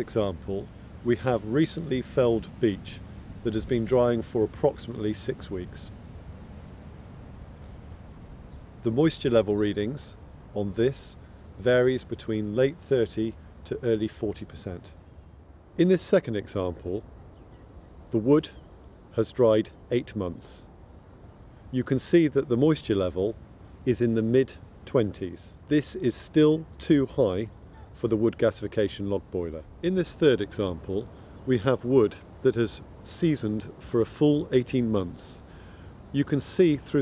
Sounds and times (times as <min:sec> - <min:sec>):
Speech: 0:00.0 - 0:05.9, 0:08.8 - 0:15.0, 0:15.8 - 0:17.0, 0:18.1 - 0:18.6, 0:19.2 - 0:20.7, 0:21.7 - 0:35.4, 0:36.1 - 0:37.0.